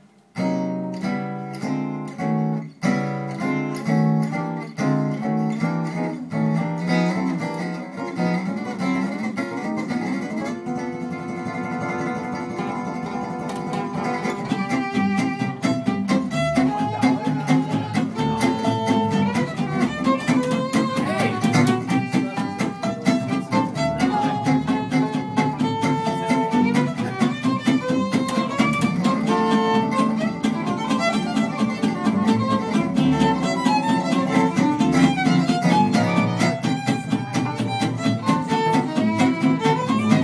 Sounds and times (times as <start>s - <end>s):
Guitar: 0.0s - 40.2s.